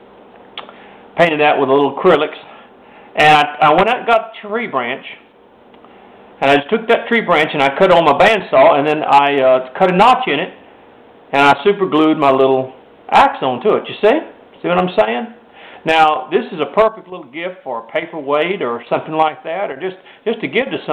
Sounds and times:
Speech: 0:01.2 - 0:02.6, 0:03.2 - 0:05.3, 0:06.4 - 0:10.6, 0:11.3 - 0:20.9.

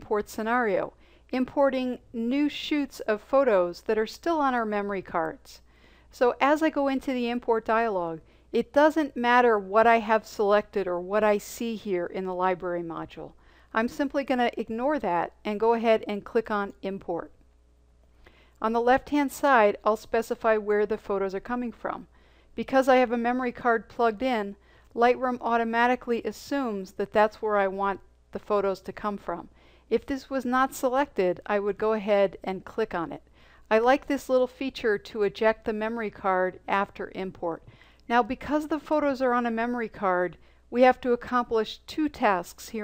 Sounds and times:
Speech: 0:00.0 - 0:05.6, 0:06.2 - 0:17.4, 0:18.6 - 0:42.8.

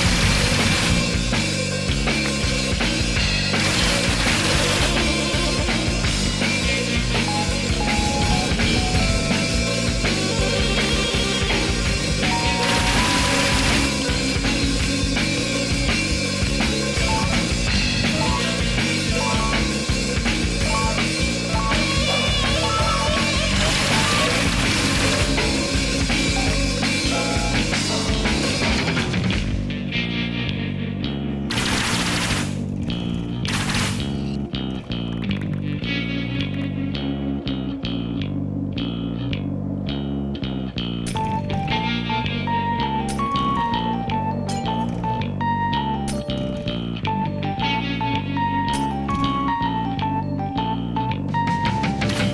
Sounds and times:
Music: 0:00.0 - 0:52.3.

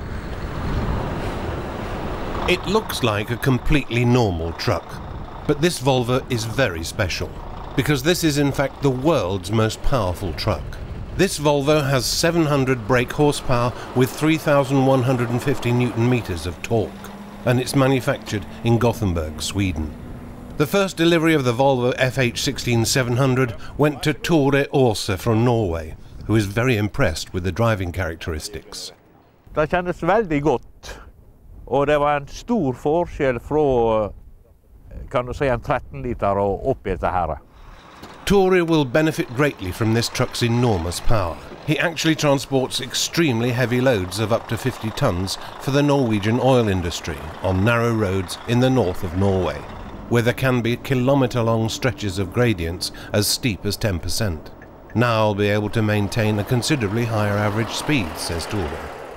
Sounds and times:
Truck: 0:00.0 - 0:29.4, 0:37.4 - 0:59.1
Speech: 0:02.5 - 0:19.9, 0:20.6 - 0:29.0, 0:29.6 - 0:31.1, 0:31.7 - 0:34.2, 0:34.9 - 0:37.5, 0:38.3 - 0:58.9.

